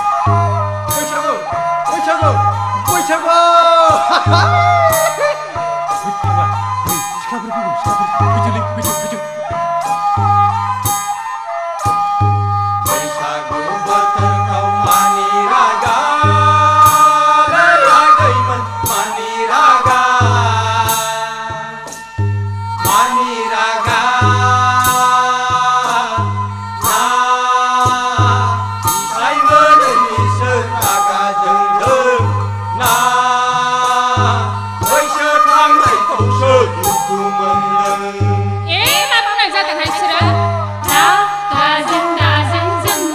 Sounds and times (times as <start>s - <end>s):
Folk music: 0.0s - 43.1s.